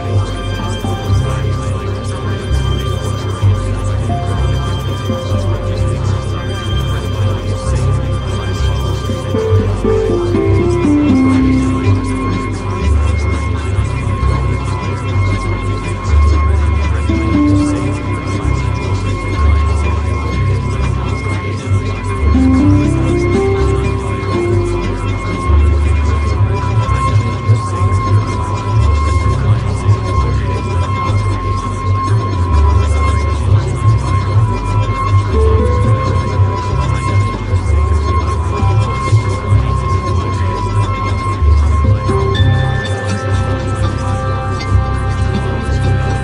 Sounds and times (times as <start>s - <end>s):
Music: 0.0s - 46.2s.